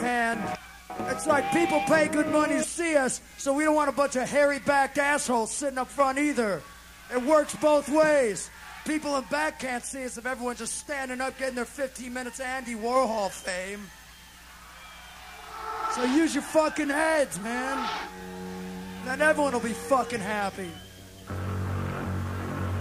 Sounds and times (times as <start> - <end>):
Speech: 0.0 - 13.9, 15.9 - 18.0, 19.0 - 20.8.